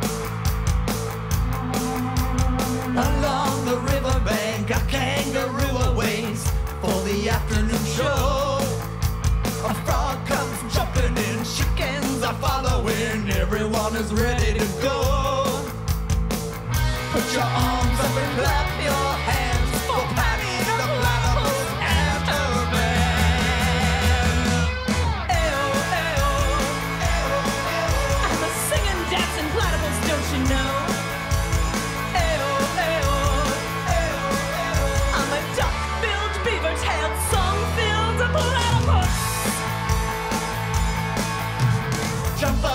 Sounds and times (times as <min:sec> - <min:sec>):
Music: 0:00.0 - 0:42.7.